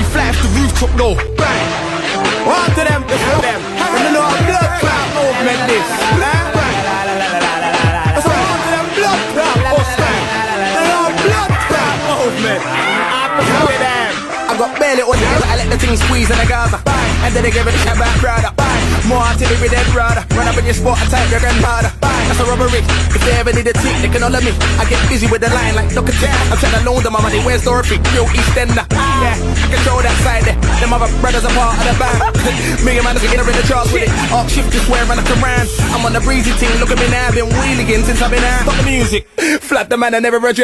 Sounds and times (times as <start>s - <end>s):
Music: 0.0s - 40.6s.